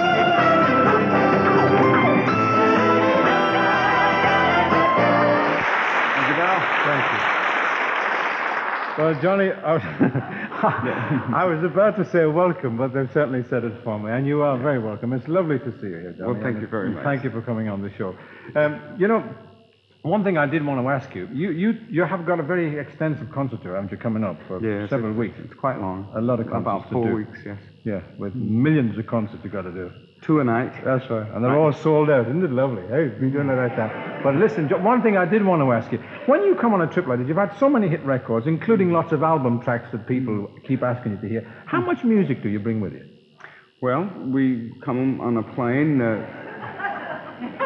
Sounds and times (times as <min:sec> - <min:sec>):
Speech: 0:06.2 - 0:07.2, 0:09.0 - 0:19.4, 0:20.1 - 0:43.1, 0:43.8 - 0:46.4.